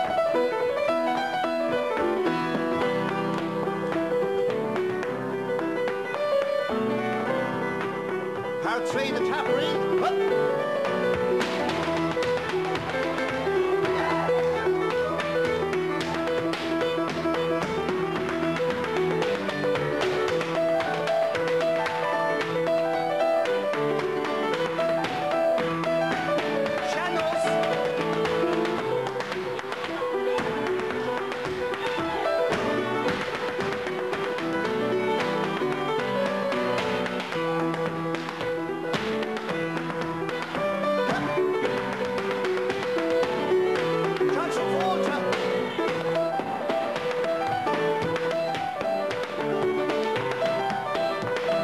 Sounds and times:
Music: 0:00.0 - 0:51.6
Tap: 0:10.8 - 0:14.2, 0:23.4 - 0:51.6.

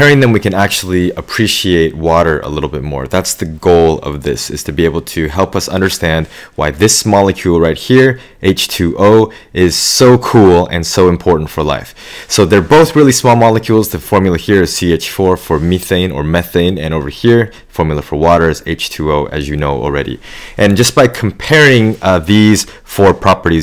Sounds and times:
Speech: 0:00.0 - 0:23.6.

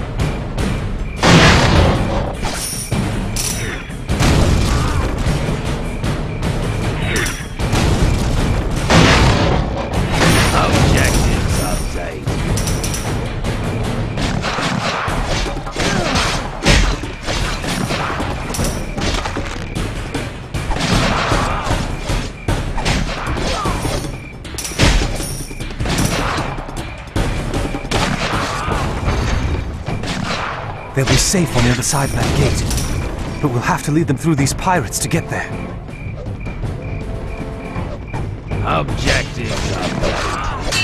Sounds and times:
Music: 0:00.0 - 0:40.8
Speech: 0:10.5 - 0:12.3, 0:31.0 - 0:32.6, 0:33.4 - 0:35.5, 0:38.6 - 0:40.1.

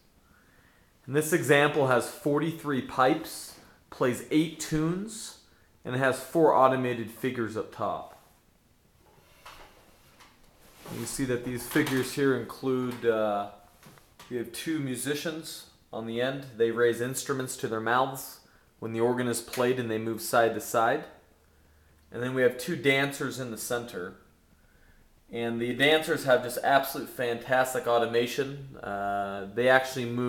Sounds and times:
Speech: 0:01.1 - 0:08.2, 0:10.8 - 0:13.6, 0:14.3 - 0:21.2, 0:22.1 - 0:24.2, 0:25.3 - 0:30.2.

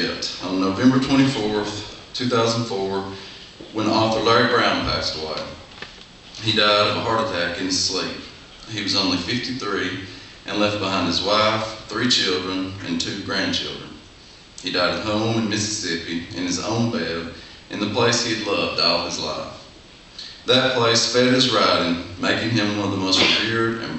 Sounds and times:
Speech: 0:00.0 - 0:05.7, 0:06.4 - 0:14.0, 0:14.6 - 0:23.9.

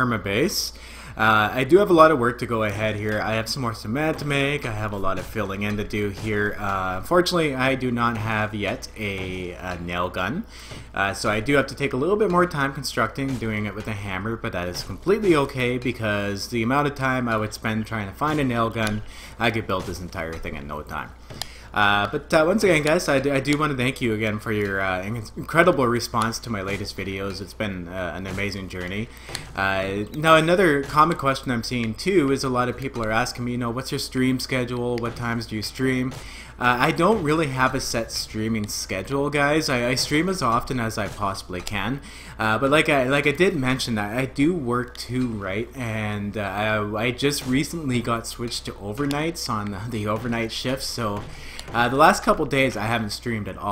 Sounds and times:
Speech: 0:00.0 - 0:53.7.

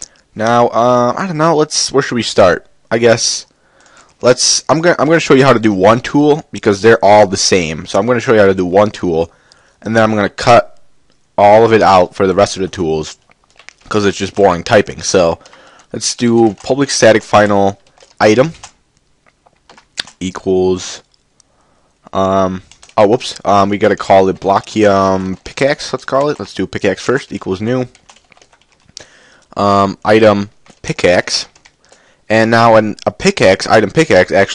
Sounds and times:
Speech: 0:00.4 - 0:03.5, 0:04.2 - 0:10.8, 0:11.4 - 0:13.2, 0:13.9 - 0:18.7, 0:20.0 - 0:21.1, 0:22.1 - 0:28.0, 0:29.6 - 0:31.6, 0:32.3 - 0:34.5.

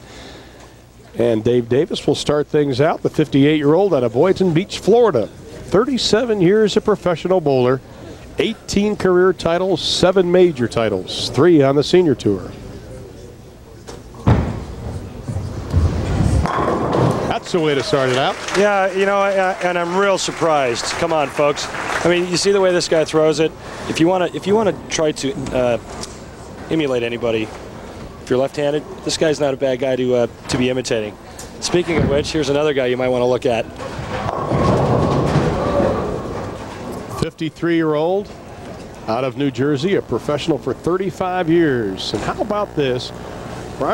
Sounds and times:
Speech: 0:01.1 - 0:07.8, 0:08.4 - 0:13.9, 0:17.3 - 0:25.8, 0:26.7 - 0:27.6, 0:28.3 - 0:33.8, 0:37.1 - 0:38.3, 0:39.1 - 0:43.2
Slam: 0:16.4 - 0:17.3.

